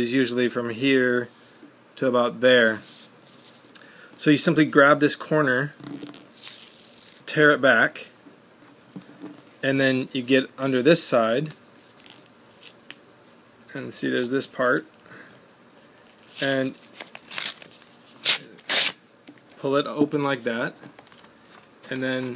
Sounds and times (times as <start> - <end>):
Speech: 0.0 - 1.3, 2.0 - 2.9, 4.2 - 5.8, 7.3 - 8.1, 9.6 - 11.6, 13.7 - 14.9, 16.4 - 16.8, 19.6 - 20.8, 21.9 - 22.3
Tearing: 6.3 - 7.2, 16.2 - 19.0.